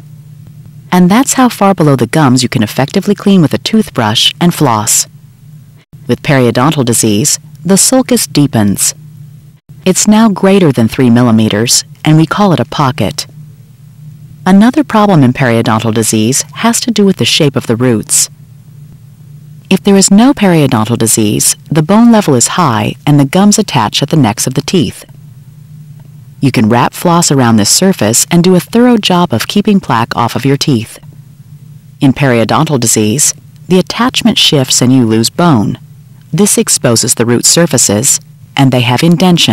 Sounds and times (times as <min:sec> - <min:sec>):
Speech: 0:00.9 - 0:05.1, 0:06.1 - 0:09.0, 0:09.9 - 0:13.3, 0:14.5 - 0:18.3, 0:19.7 - 0:25.1, 0:26.4 - 0:31.0, 0:32.0 - 0:39.5.